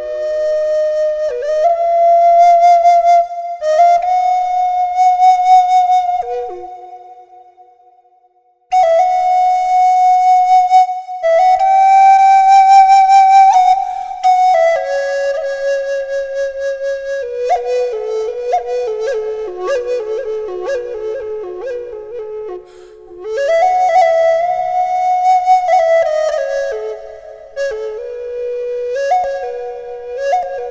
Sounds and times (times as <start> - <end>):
Flute: 0.0 - 30.7.